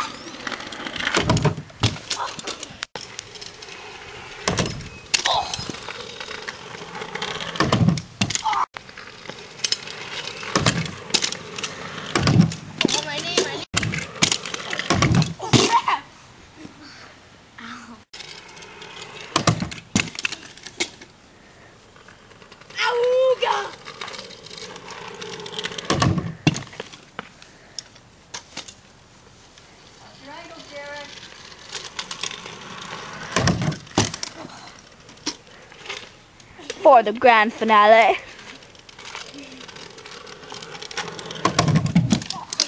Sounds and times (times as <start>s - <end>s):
Outside, rural or natural: 0.0s - 42.6s.